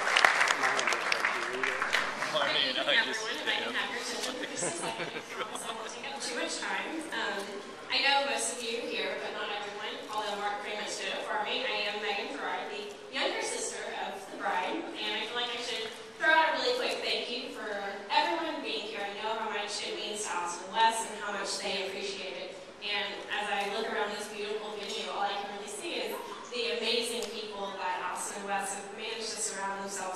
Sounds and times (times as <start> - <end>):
Female speech, woman speaking: 2.4 - 30.1.